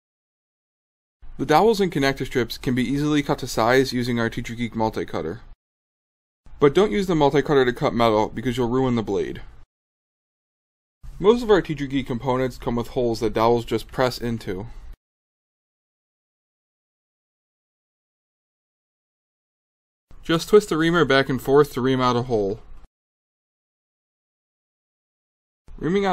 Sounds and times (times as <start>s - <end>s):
Speech: 1.4s - 5.6s, 6.6s - 9.5s, 11.2s - 14.7s, 20.2s - 22.7s, 25.8s - 26.1s.